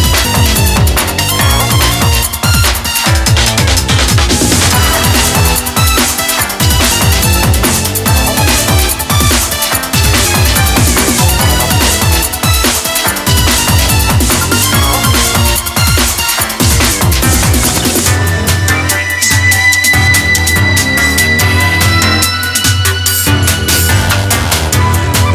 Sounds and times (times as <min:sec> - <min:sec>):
Music: 0:00.0 - 0:25.3.